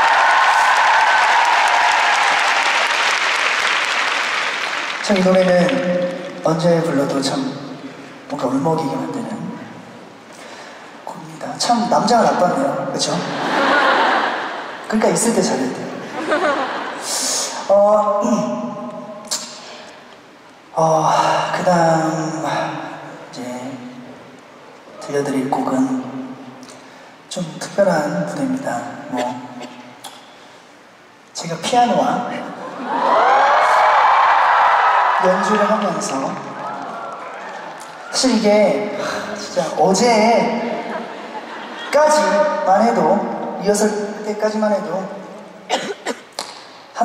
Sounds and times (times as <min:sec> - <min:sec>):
Speech: 0:17.1 - 0:18.8, 0:27.3 - 0:29.6, 0:31.4 - 0:32.6, 0:35.2 - 0:36.6, 0:38.1 - 0:40.8, 0:41.9 - 0:45.2.